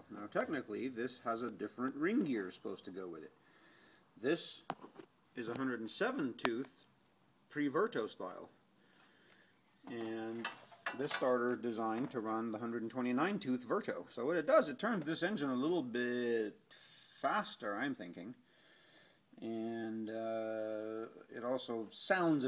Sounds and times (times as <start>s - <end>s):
Speech: 0.0s - 3.4s, 4.2s - 4.7s, 5.4s - 6.9s, 7.5s - 8.6s, 9.9s - 18.4s, 19.4s - 22.4s.